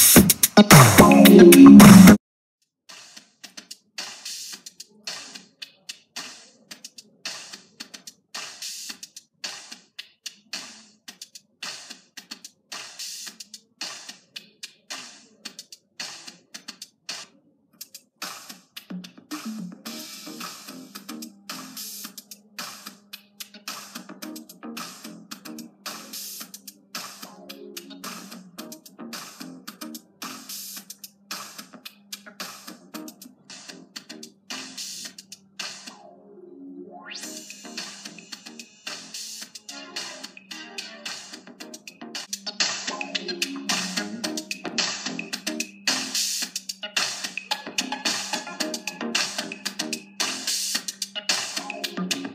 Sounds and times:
Music: 0:00.0 - 0:02.2, 0:02.9 - 0:52.3.

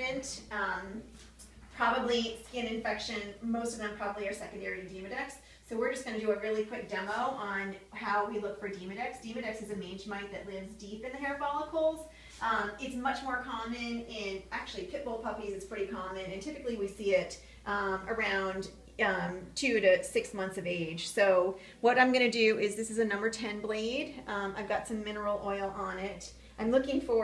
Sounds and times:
Speech: 0:00.0 - 0:01.1, 0:01.8 - 0:27.2.

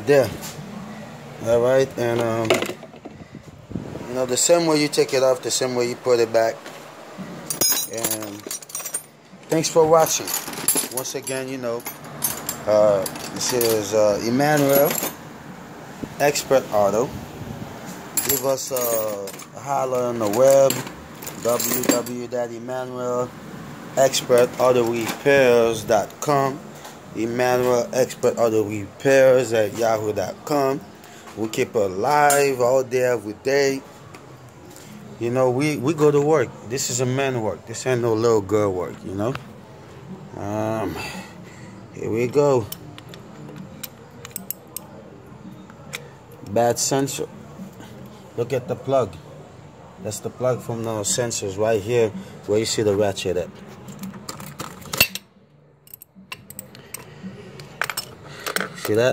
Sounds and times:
Speech: 0:00.0 - 0:00.5, 0:01.4 - 0:02.6, 0:04.1 - 0:06.6, 0:07.9 - 0:08.5, 0:09.5 - 0:10.3, 0:10.9 - 0:11.8, 0:12.7 - 0:15.0, 0:16.2 - 0:17.1, 0:18.2 - 0:23.3, 0:24.0 - 0:26.6, 0:27.2 - 0:33.9, 0:35.2 - 0:39.4, 0:42.0 - 0:42.7, 0:46.5 - 0:47.4, 0:48.4 - 0:49.2, 0:50.0 - 0:53.6, 0:58.8 - 0:59.1.

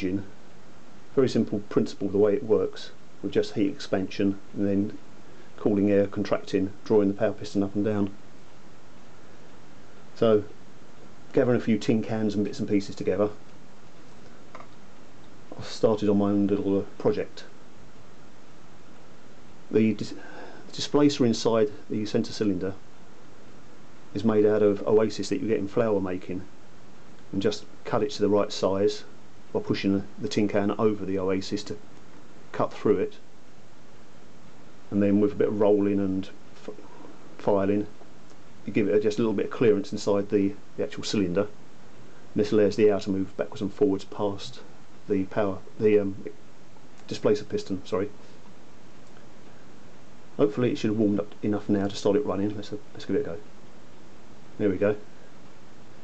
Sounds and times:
Speech: 0:00.0 - 0:00.4, 0:01.2 - 0:05.0, 0:05.6 - 0:08.2, 0:10.2 - 0:10.6, 0:11.3 - 0:13.4, 0:15.5 - 0:17.6, 0:19.7 - 0:22.8, 0:24.1 - 0:26.5, 0:27.3 - 0:31.8, 0:32.5 - 0:33.2, 0:34.9 - 0:38.0, 0:38.6 - 0:41.6, 0:42.4 - 0:46.4, 0:47.1 - 0:48.2, 0:50.4 - 0:53.5, 0:54.6 - 0:55.1.

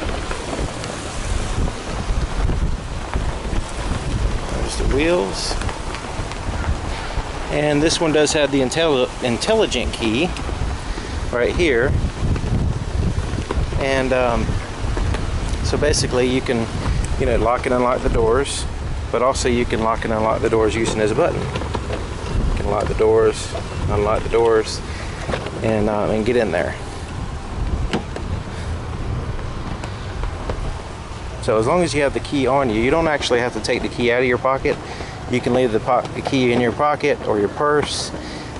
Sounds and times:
Outside, rural or natural: 0:00.0 - 0:38.5
Speech: 0:04.5 - 0:05.6, 0:07.5 - 0:10.4, 0:11.3 - 0:12.0, 0:13.8 - 0:14.6, 0:15.6 - 0:21.5, 0:22.5 - 0:24.9, 0:25.6 - 0:26.8, 0:31.4 - 0:38.2.

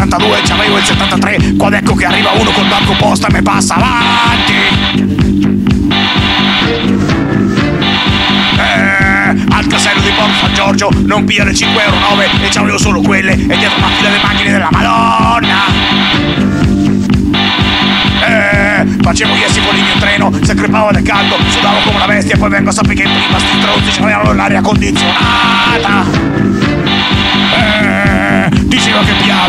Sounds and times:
Rapping: 0:00.0 - 0:04.8, 0:08.6 - 0:15.8, 0:18.2 - 0:26.2, 0:27.8 - 0:29.4
Music: 0:00.0 - 0:29.4.

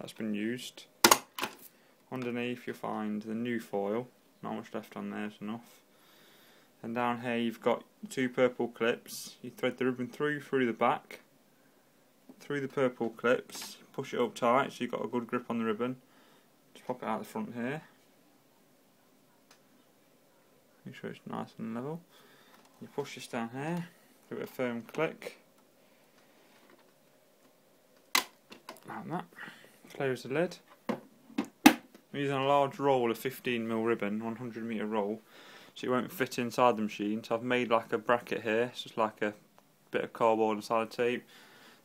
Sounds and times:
Speech: 0:00.0 - 0:00.9, 0:02.1 - 0:05.8, 0:06.8 - 0:11.3, 0:12.4 - 0:16.0, 0:16.8 - 0:18.0, 0:20.8 - 0:22.0, 0:22.8 - 0:25.4, 0:28.8 - 0:30.7, 0:32.1 - 0:35.2, 0:35.8 - 0:41.3.

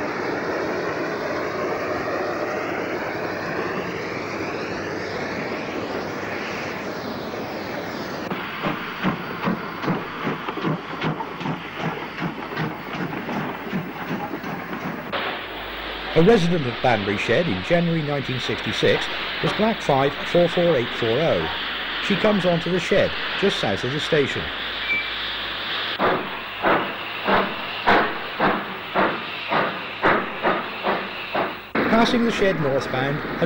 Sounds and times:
Railroad car, train wagon: 0:00.0 - 0:04.2, 0:06.0 - 0:33.4
Train: 0:00.0 - 0:33.4.

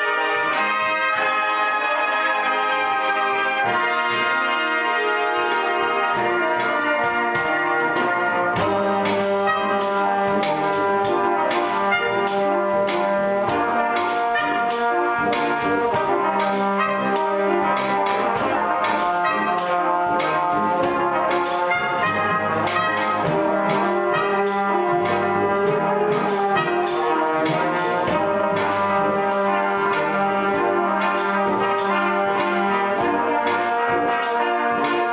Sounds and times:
Inside, large room or hall: 0:00.0 - 0:35.1
Music: 0:00.0 - 0:35.1.

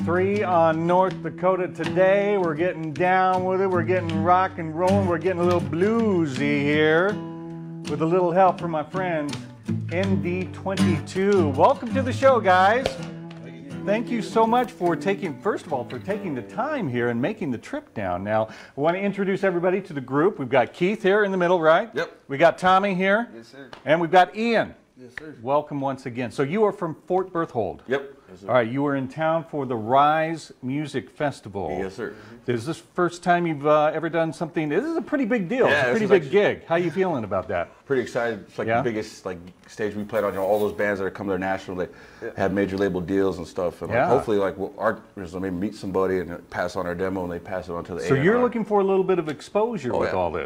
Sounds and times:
Speech: 0:00.0 - 0:07.2, 0:07.9 - 0:09.4, 0:10.0 - 0:50.4.

